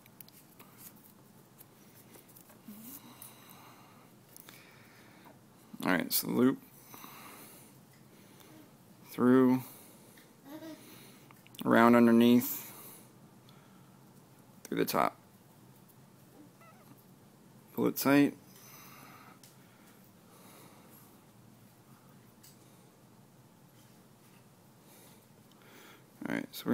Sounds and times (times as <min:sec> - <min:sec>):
Inside, small room: 0:00.0 - 0:26.7
Speech: 0:05.8 - 0:06.6, 0:17.8 - 0:18.4, 0:26.2 - 0:26.7.